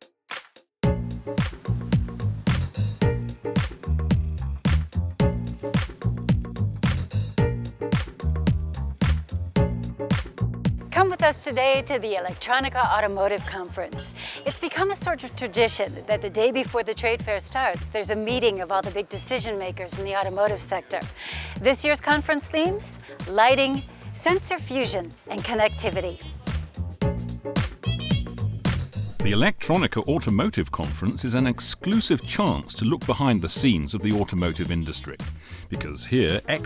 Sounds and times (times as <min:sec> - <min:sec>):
Speech: 0:11.0 - 0:26.2, 0:29.2 - 0:36.6.